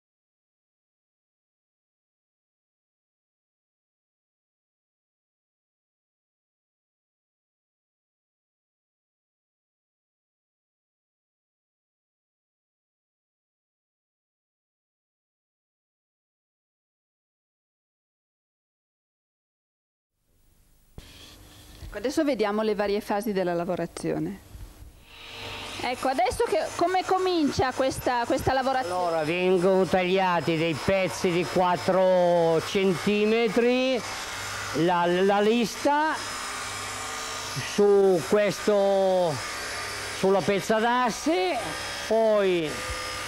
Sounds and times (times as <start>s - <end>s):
Speech: 21.9s - 24.4s, 25.8s - 34.1s, 34.8s - 36.2s, 37.6s - 39.4s, 40.2s - 42.8s.